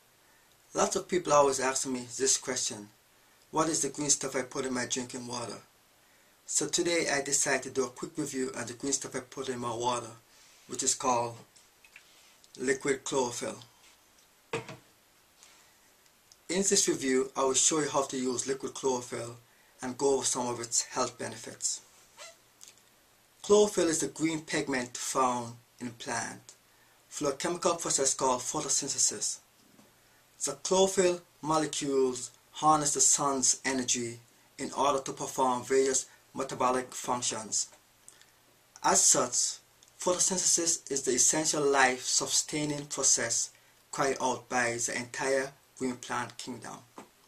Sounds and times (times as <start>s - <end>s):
Speech: 0.7s - 5.7s, 6.5s - 11.5s, 12.6s - 13.7s, 16.5s - 21.9s, 23.4s - 29.5s, 30.4s - 37.8s, 38.8s - 47.0s.